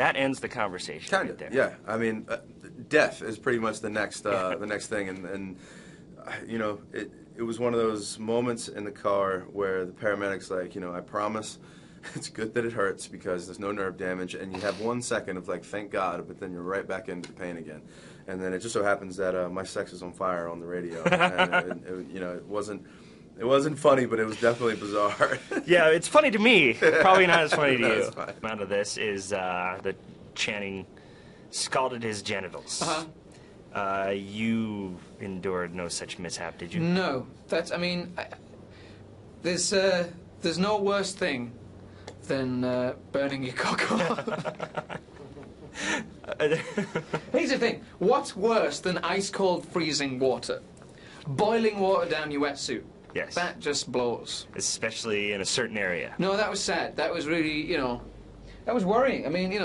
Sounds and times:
Speech: 0.0 - 5.6, 6.2 - 30.9, 31.5 - 33.2, 33.8 - 38.4, 39.4 - 41.6, 42.2 - 44.3, 47.3 - 50.6, 51.3 - 58.1, 58.7 - 59.6.

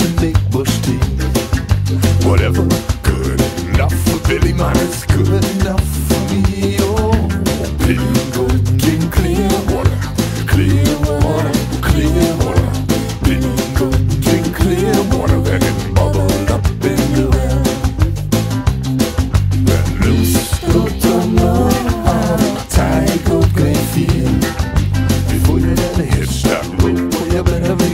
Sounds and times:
Music: 0.0 - 27.9.

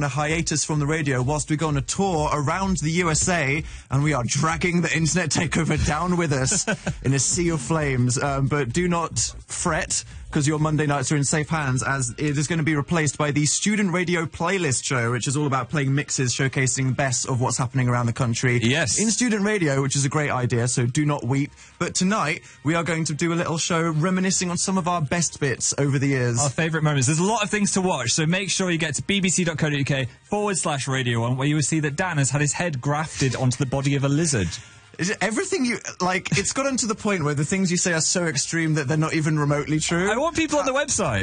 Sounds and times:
Speech: 0.0 - 41.2.

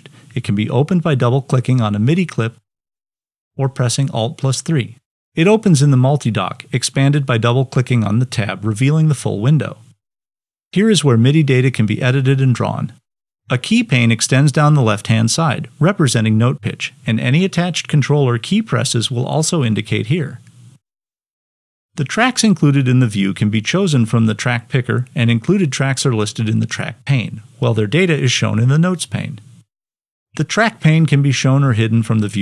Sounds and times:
Speech: 0.0 - 2.6, 3.6 - 10.0, 10.7 - 20.5, 22.0 - 29.5, 30.4 - 32.4.

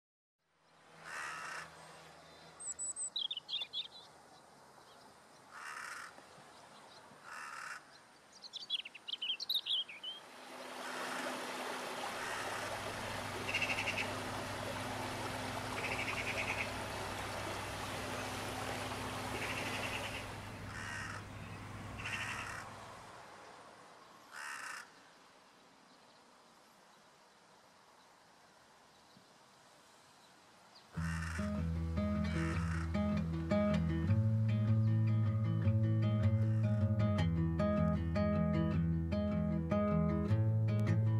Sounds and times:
Chirp, tweet: 2.0 - 5.5, 7.9 - 10.2.

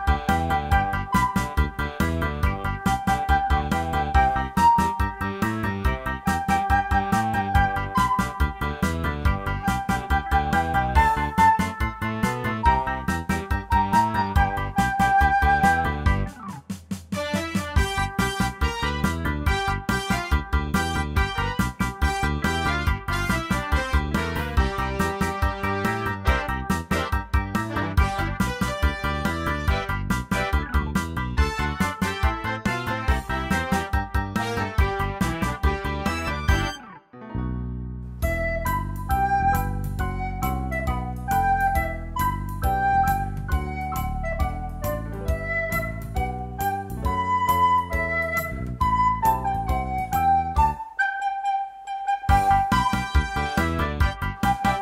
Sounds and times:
Music: 0.0 - 54.8.

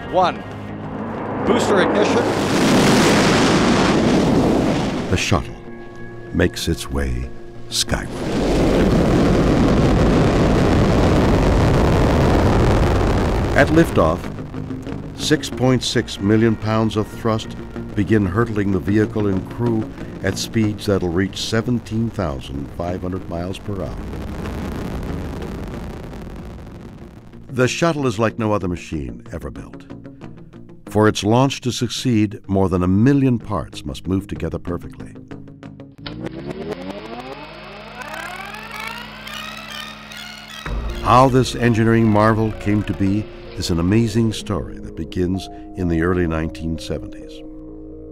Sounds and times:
Speech: 0.0 - 0.4, 1.5 - 2.3, 5.1 - 5.6, 6.3 - 8.2, 13.6 - 14.3, 15.2 - 24.0, 27.5 - 29.8, 30.9 - 35.2, 41.0 - 47.4.

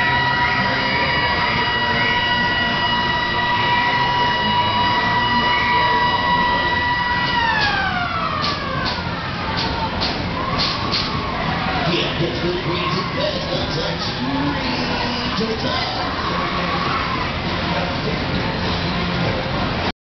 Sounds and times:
Music: 0.0 - 19.9
Speech: 11.6 - 19.9.

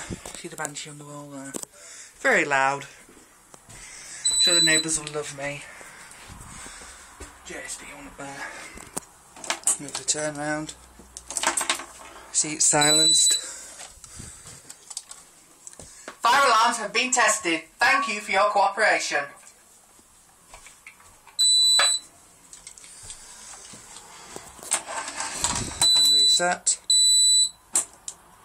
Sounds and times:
Speech: 0.4 - 1.6, 2.2 - 3.0, 4.5 - 5.7, 7.5 - 8.5, 9.8 - 10.8, 12.4 - 13.3, 16.2 - 19.4, 26.1 - 26.8.

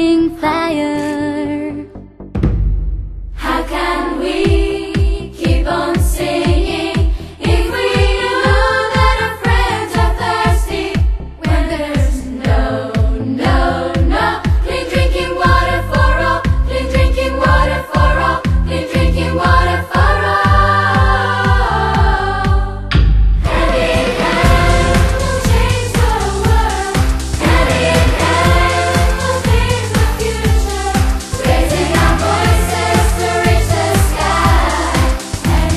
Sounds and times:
Music: 0.0 - 35.7.

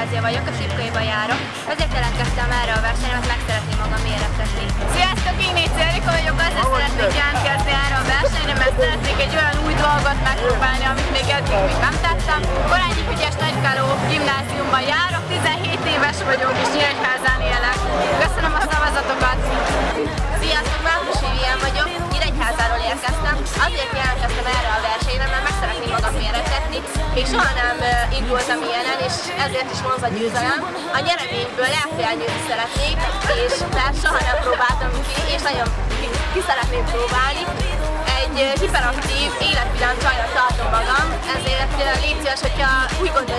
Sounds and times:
Music: 0.0 - 43.3
Speech: 0.0 - 43.3.

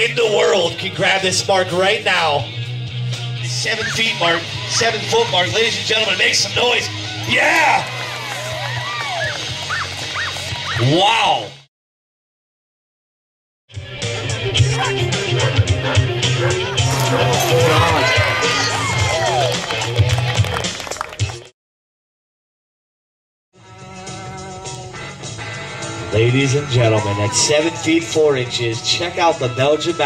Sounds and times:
Speech: 0.0 - 2.5, 3.5 - 7.8, 10.8 - 11.6, 26.1 - 30.0
Music: 0.0 - 11.7, 13.7 - 21.5, 23.6 - 30.0.

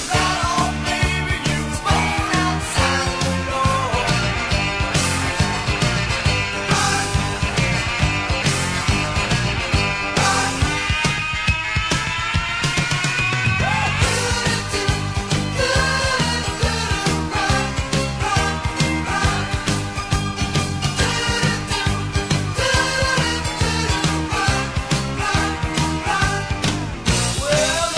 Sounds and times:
Music: 0.0 - 27.9.

